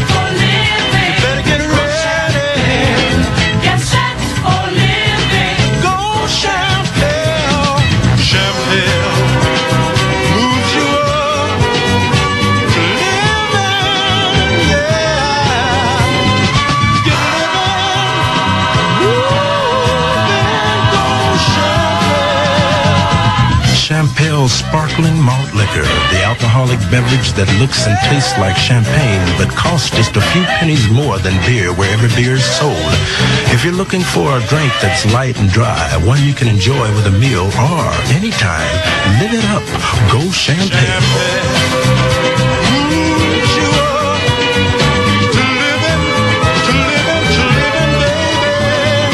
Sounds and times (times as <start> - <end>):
Music: 0.0 - 49.1
Speech: 23.7 - 41.0.